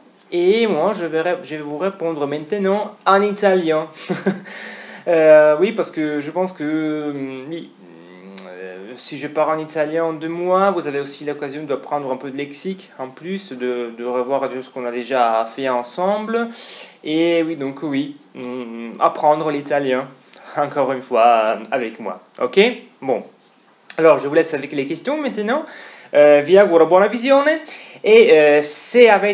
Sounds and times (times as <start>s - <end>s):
Speech: 0.3s - 4.0s, 5.1s - 29.3s.